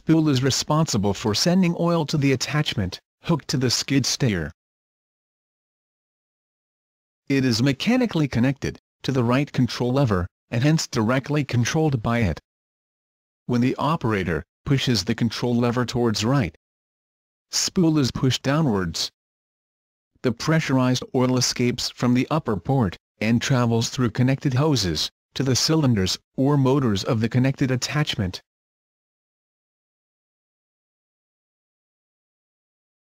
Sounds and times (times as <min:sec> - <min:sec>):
Speech: 0:00.0 - 0:04.6, 0:07.3 - 0:12.5, 0:13.5 - 0:16.6, 0:17.5 - 0:19.2, 0:20.2 - 0:28.5.